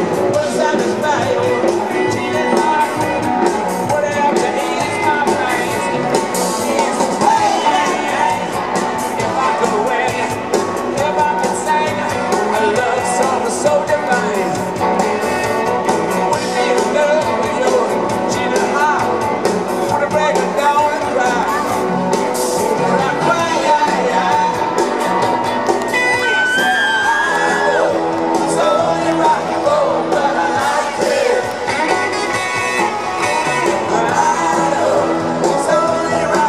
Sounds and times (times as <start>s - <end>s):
Rock and roll: 0.0s - 36.4s.